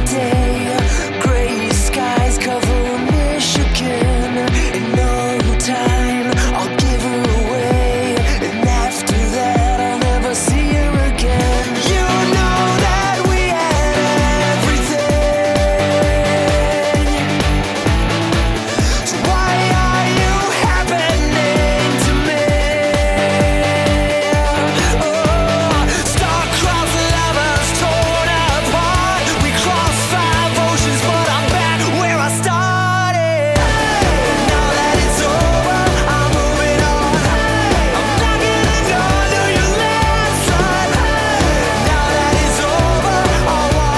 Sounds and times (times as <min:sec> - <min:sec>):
Music: 0:00.0 - 0:43.9.